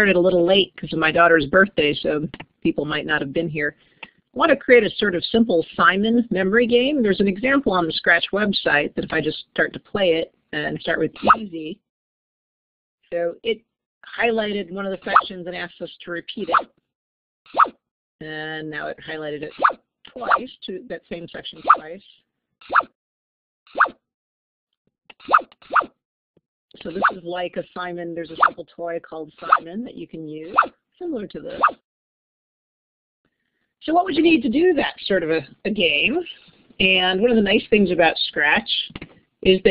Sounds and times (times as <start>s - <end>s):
Speech: 0.0s - 3.7s, 4.4s - 11.8s, 13.1s - 16.6s, 18.2s - 22.2s, 26.8s - 31.6s, 33.8s - 39.7s.